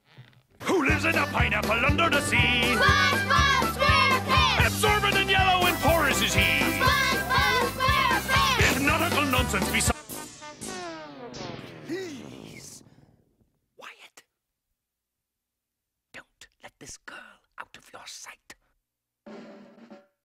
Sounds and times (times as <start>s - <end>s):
Speech: 0.6s - 2.8s, 8.6s - 10.0s, 11.9s - 12.8s
Music: 0.6s - 10.6s, 19.3s - 20.2s.